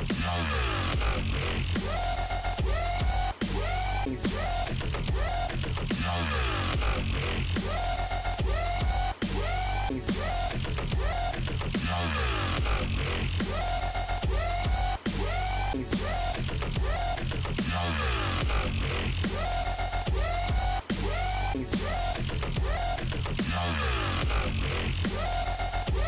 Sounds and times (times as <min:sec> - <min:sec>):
Dubstep: 0:00.0 - 0:26.0.